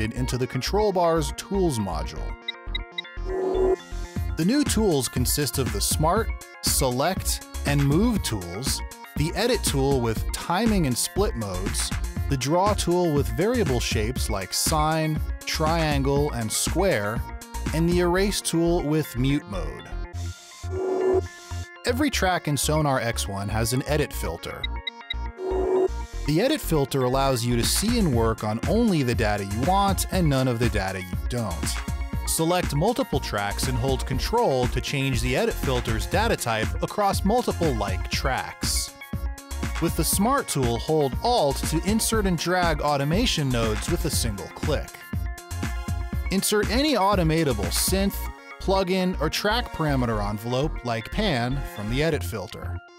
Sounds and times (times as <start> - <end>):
Speech: 0.0 - 2.4, 4.4 - 19.8, 21.9 - 24.6, 26.3 - 38.9, 39.8 - 44.9, 46.3 - 52.8
Music: 0.0 - 52.9.